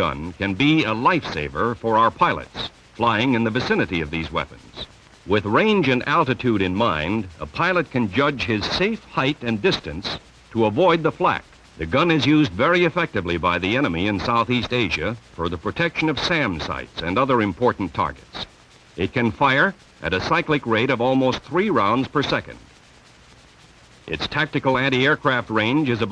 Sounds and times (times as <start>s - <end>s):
Speech: 0.0s - 22.7s, 24.1s - 26.1s.